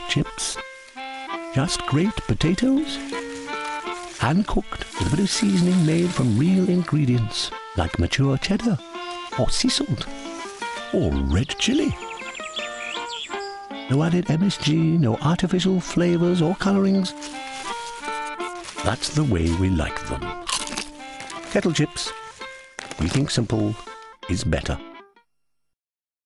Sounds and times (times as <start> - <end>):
Speech: 0.0 - 0.6, 1.6 - 3.0, 4.2 - 8.8, 9.4 - 10.1, 10.9 - 12.0, 13.9 - 17.1, 18.8 - 20.4, 21.5 - 22.2, 23.0 - 24.8
Music: 0.0 - 25.3.